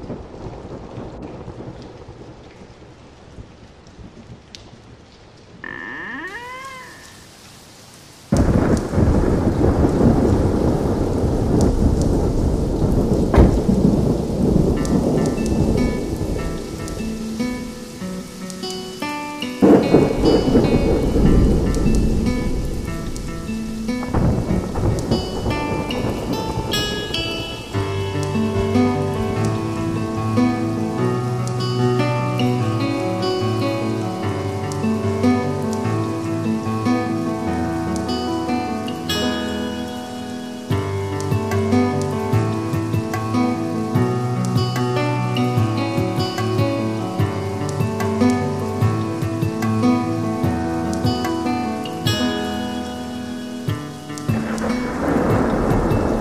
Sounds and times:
Raindrop: 0.0s - 56.2s.

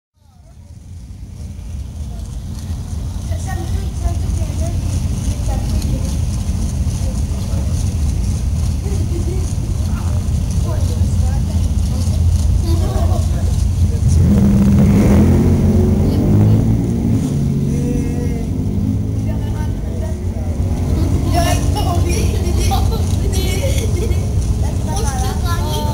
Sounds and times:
Car: 0.2s - 25.9s.

